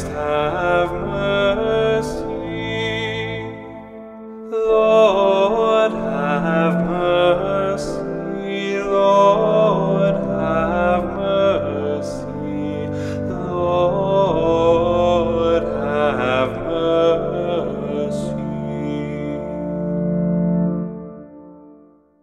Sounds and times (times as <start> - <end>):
Music: 0.0 - 22.2.